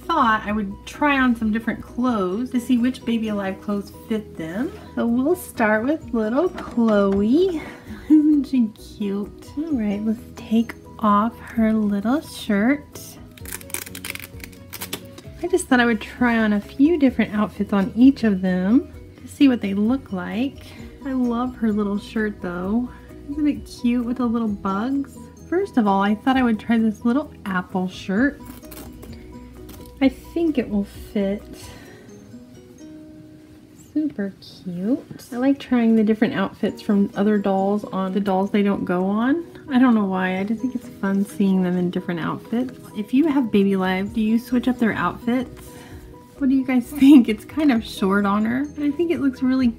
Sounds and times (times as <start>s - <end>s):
Speech: 0.0s - 13.2s, 15.4s - 28.4s, 30.0s - 31.6s, 33.9s - 45.5s, 46.4s - 49.7s
Music: 0.0s - 49.7s.